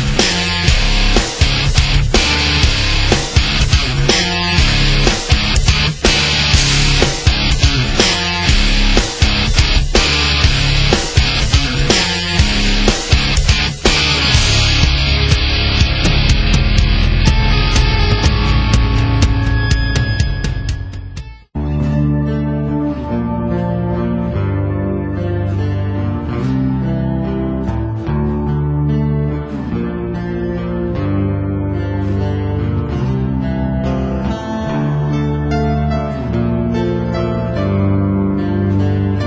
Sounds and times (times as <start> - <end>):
Music: 0.0 - 39.2.